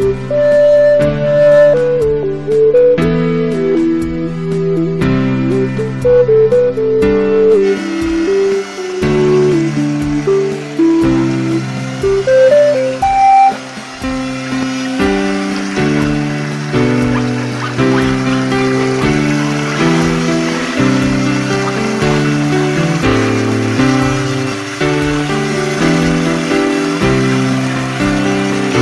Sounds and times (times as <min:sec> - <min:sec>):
Music: 0:00.0 - 0:28.8.